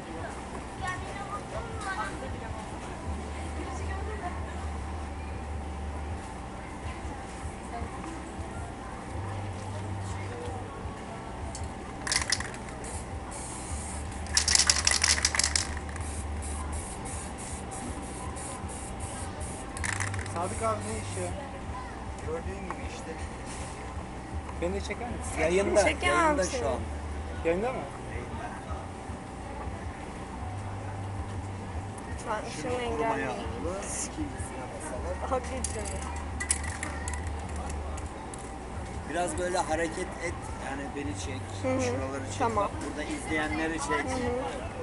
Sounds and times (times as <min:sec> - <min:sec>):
Spray: 0:12.8 - 0:19.7.